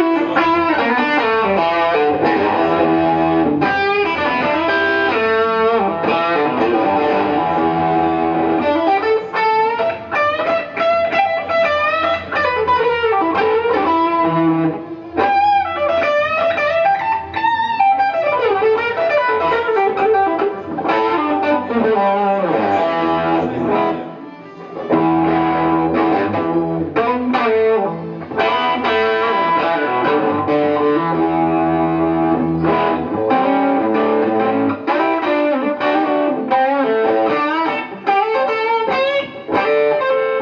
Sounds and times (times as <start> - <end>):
Tapping (guitar technique): 0.0 - 40.4.